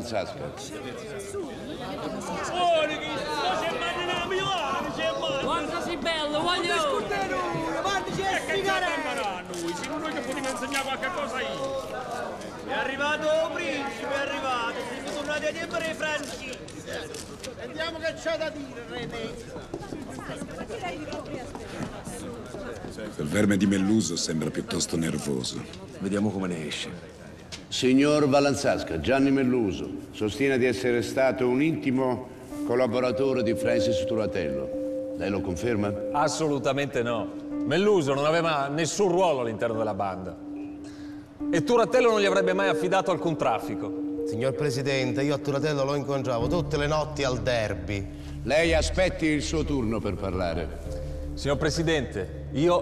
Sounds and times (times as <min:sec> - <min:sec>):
Speech: 0:00.0 - 0:40.4, 0:41.5 - 0:50.8, 0:51.4 - 0:52.8
Music: 0:28.8 - 0:52.8.